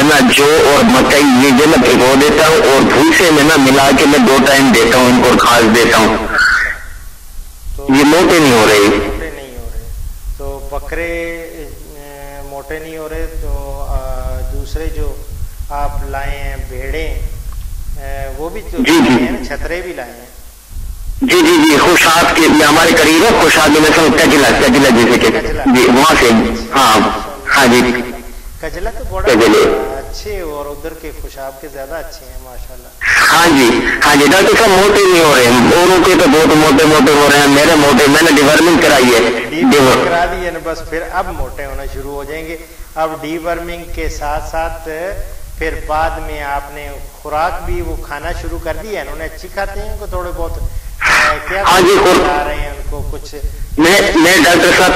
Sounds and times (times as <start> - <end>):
Narration, monologue: 0.0 - 54.9.